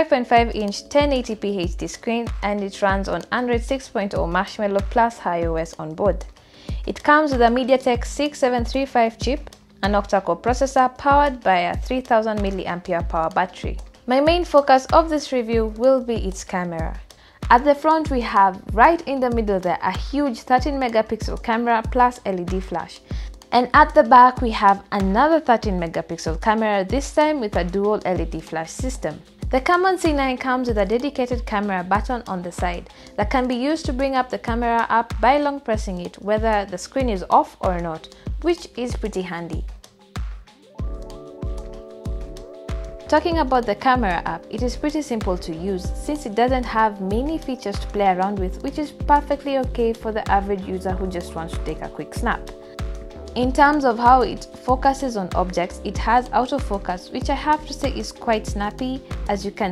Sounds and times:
Speech: 0:00.0 - 0:06.3, 0:06.9 - 0:39.6, 0:43.1 - 0:52.5, 0:53.4 - 0:59.7.

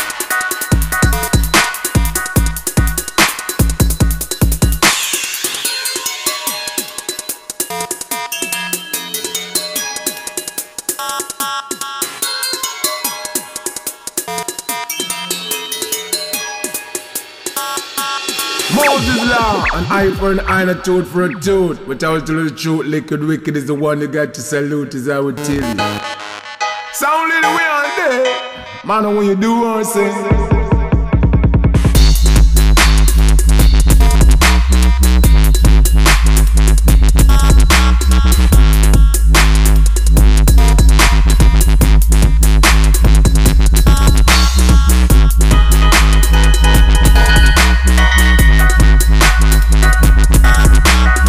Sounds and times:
Music: 0:00.0 - 0:51.2.

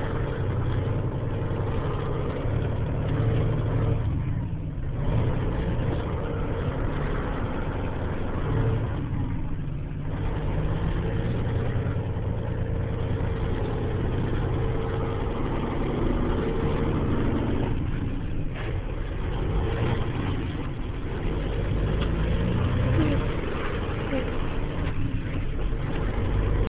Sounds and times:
Vehicle: 0:00.0 - 0:26.6.

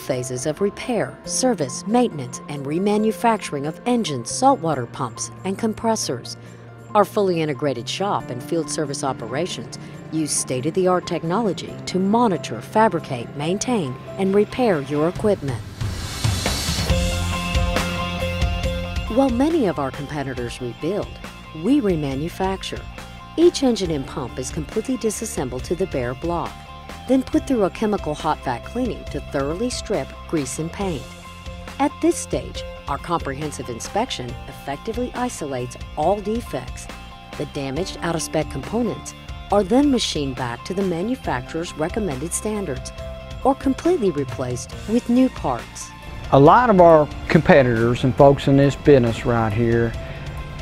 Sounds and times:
Speech: 0:00.0 - 0:06.4, 0:07.0 - 0:15.6, 0:19.1 - 0:22.8, 0:23.4 - 0:31.1, 0:31.8 - 0:50.0
Music: 0:00.0 - 0:50.6.

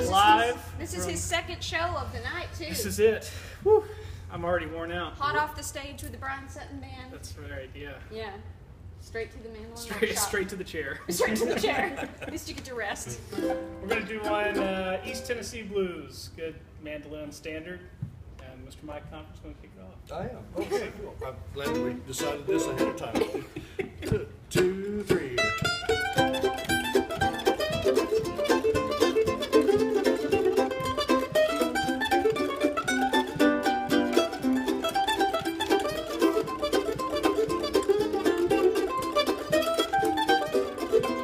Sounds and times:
Mandolin: 0:00.0 - 0:01.0, 0:13.2 - 0:15.4, 0:21.6 - 0:41.2.

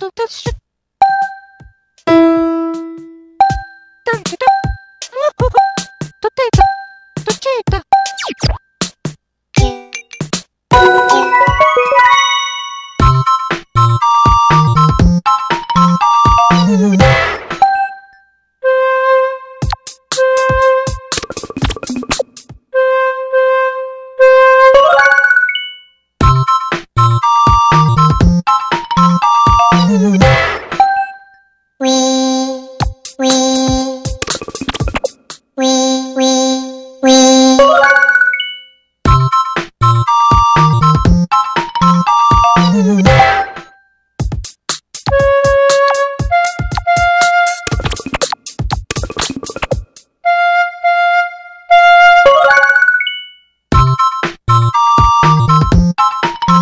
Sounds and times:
Music: 0:01.2 - 0:52.7, 0:53.4 - 0:56.6.

